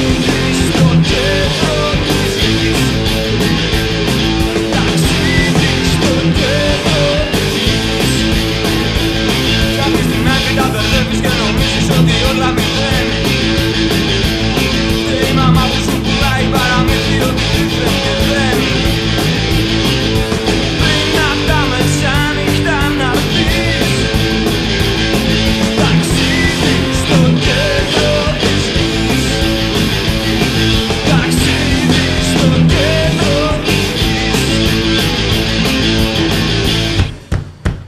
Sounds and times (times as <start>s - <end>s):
Electric guitar: 0.0s - 37.3s.